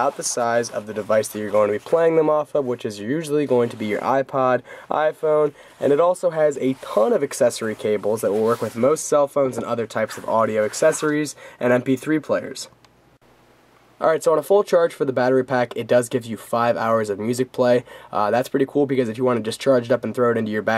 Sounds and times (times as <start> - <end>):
Speech: 0.0 - 12.8, 14.0 - 20.7.